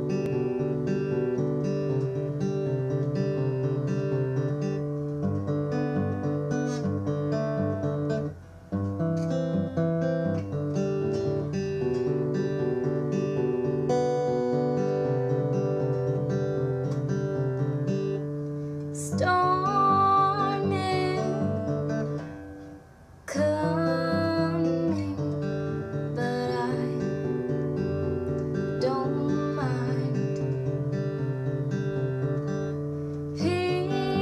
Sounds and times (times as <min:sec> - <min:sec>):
Music: 0:00.0 - 0:34.2.